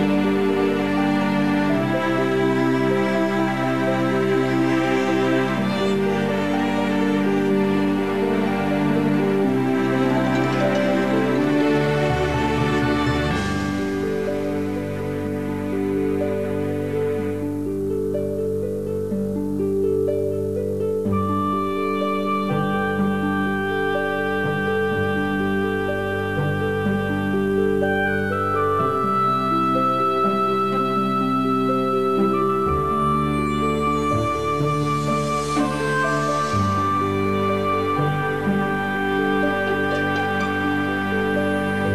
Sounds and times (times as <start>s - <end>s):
Music: 0.0s - 41.9s.